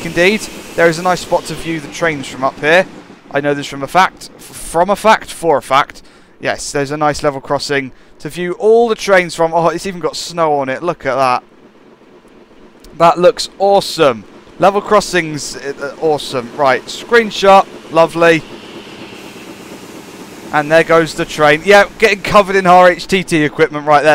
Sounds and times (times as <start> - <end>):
Speech: 0.0 - 11.4, 12.9 - 18.5, 20.5 - 24.1
Train: 0.0 - 24.1.